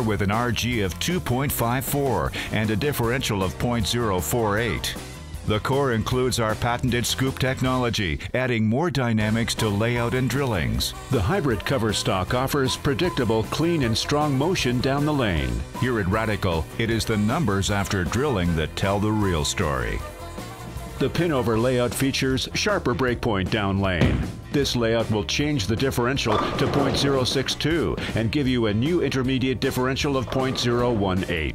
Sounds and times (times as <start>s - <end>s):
Speech: 0.0s - 20.1s, 21.0s - 31.5s
Music: 0.0s - 31.5s.